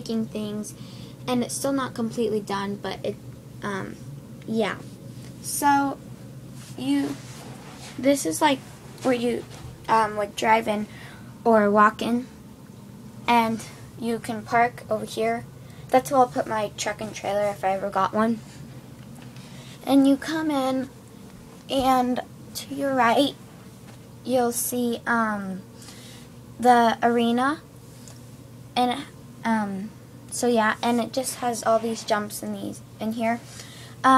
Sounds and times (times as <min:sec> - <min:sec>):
Speech: 0:00.0 - 0:04.8, 0:05.4 - 0:06.0, 0:06.8 - 0:07.2, 0:08.0 - 0:12.3, 0:13.3 - 0:18.4, 0:19.8 - 0:20.9, 0:21.7 - 0:23.4, 0:24.3 - 0:25.6, 0:26.6 - 0:27.6, 0:28.8 - 0:33.4.